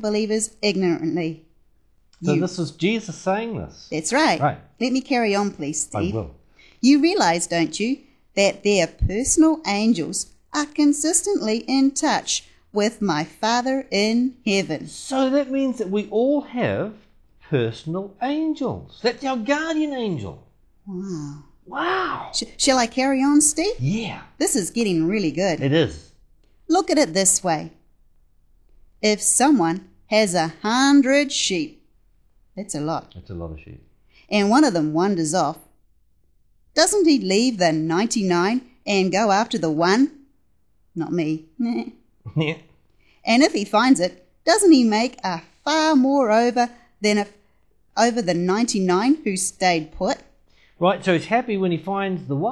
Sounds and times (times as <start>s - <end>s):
Speech: 2.2s - 26.1s, 26.7s - 27.7s, 29.0s - 31.7s, 32.6s - 35.6s, 36.8s - 40.1s, 41.0s - 42.6s, 43.3s - 47.3s, 48.0s - 50.2s, 50.8s - 52.5s.